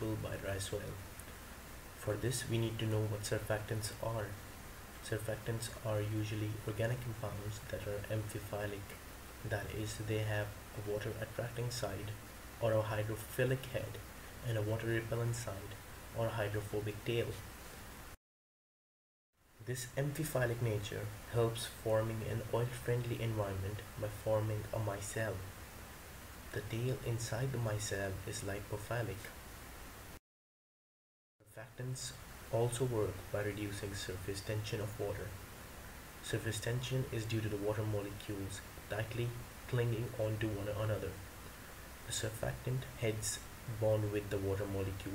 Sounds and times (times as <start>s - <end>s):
Speech: 0.0s - 1.0s, 2.0s - 4.4s, 5.0s - 17.5s, 19.6s - 25.5s, 26.5s - 29.4s, 31.4s - 35.4s, 36.2s - 41.3s, 42.1s - 45.1s.